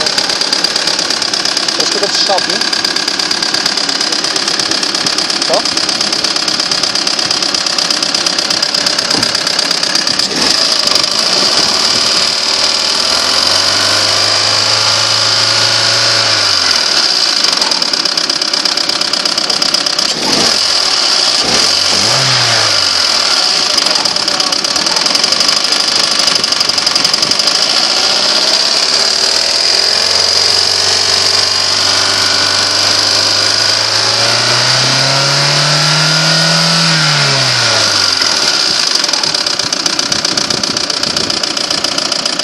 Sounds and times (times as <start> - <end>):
Idling: 0.0 - 42.4.